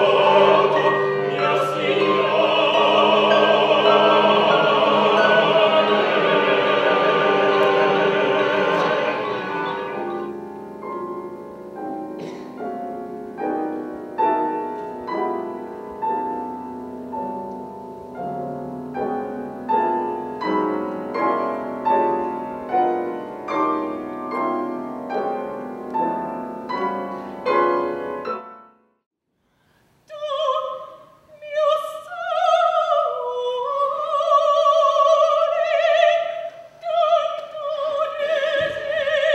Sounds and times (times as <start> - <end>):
Opera: 0.0 - 28.8, 29.6 - 39.3.